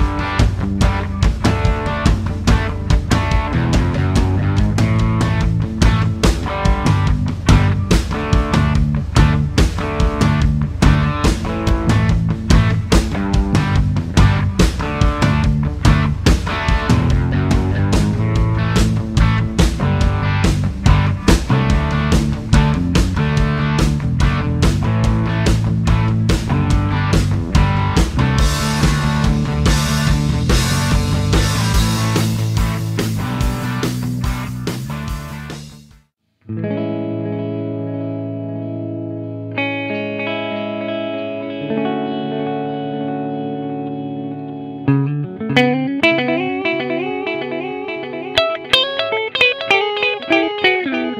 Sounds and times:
Guitar: 0:00.0 - 0:51.1.

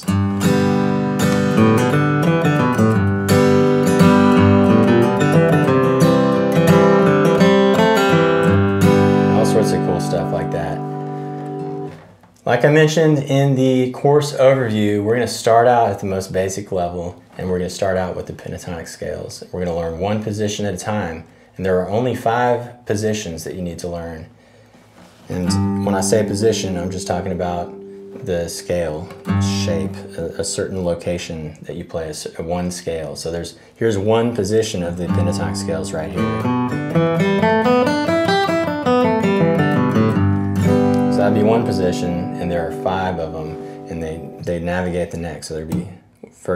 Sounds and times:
Music: 0:00.0 - 0:12.0, 0:25.4 - 0:30.5, 0:35.1 - 0:44.5
Speech: 0:09.4 - 0:10.8, 0:12.4 - 0:24.3, 0:25.3 - 0:36.4, 0:41.1 - 0:46.5.

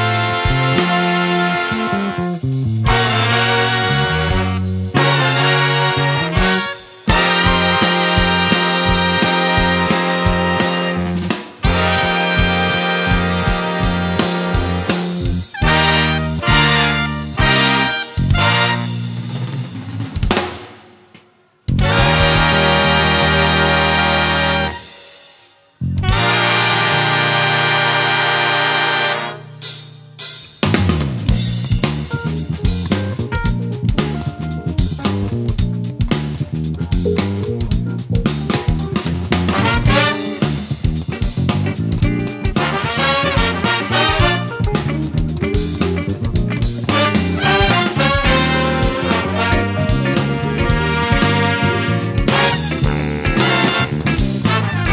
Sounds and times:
Music: 0:00.0 - 0:54.9.

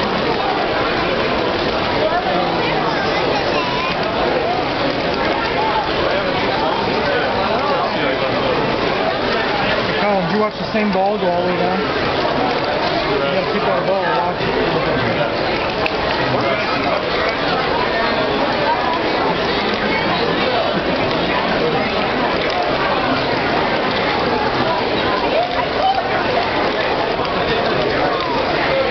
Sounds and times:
Speech: 0:00.0 - 0:28.9.

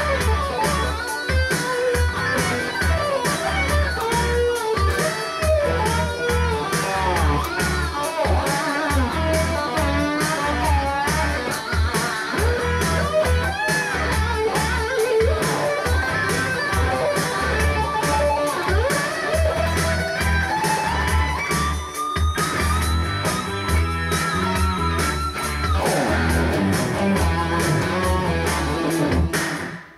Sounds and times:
Electric guitar: 0:00.0 - 0:29.9.

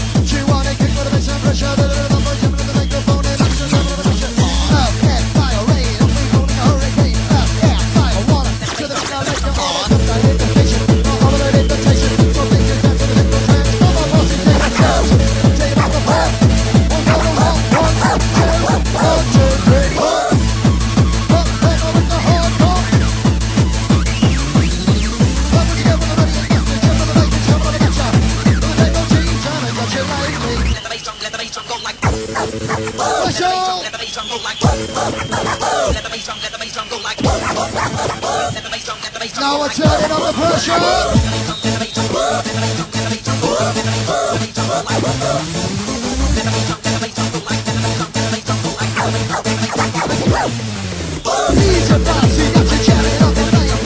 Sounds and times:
Techno: 0:00.0 - 0:53.8.

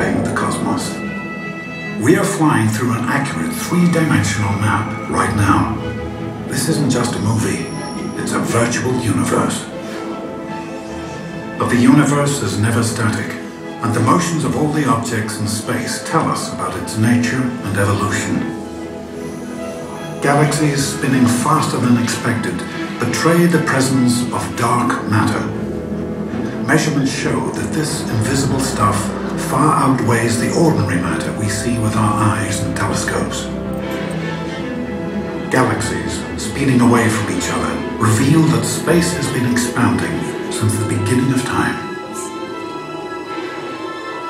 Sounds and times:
Speech: 0:00.0 - 0:01.1, 0:02.0 - 0:09.8, 0:11.6 - 0:18.6, 0:20.2 - 0:25.7, 0:26.6 - 0:33.6, 0:35.5 - 0:42.6
Music: 0:00.0 - 0:44.3.

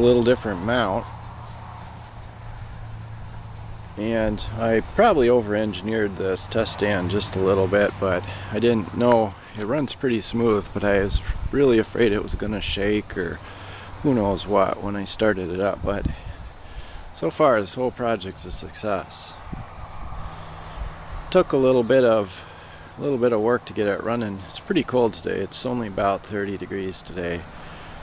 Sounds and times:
Speech: 0:00.0 - 0:01.1, 0:04.0 - 0:13.4, 0:14.0 - 0:16.3, 0:17.1 - 0:19.4, 0:21.3 - 0:27.5.

